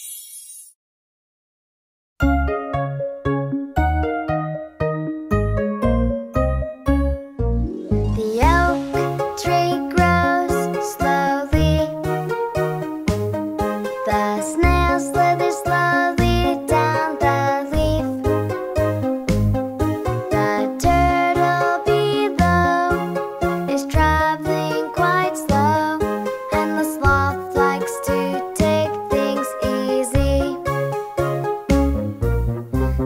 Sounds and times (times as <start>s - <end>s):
Music for children: 2.2s - 33.0s.